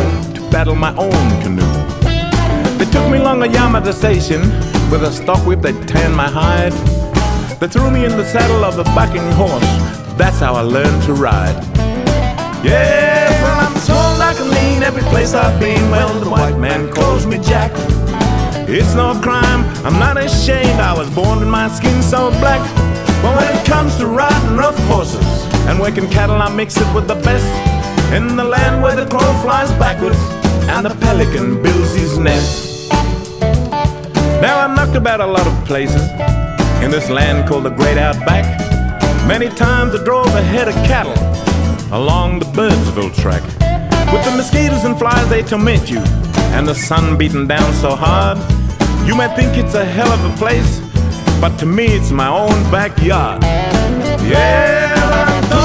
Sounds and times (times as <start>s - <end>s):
Music: 0.0s - 55.6s.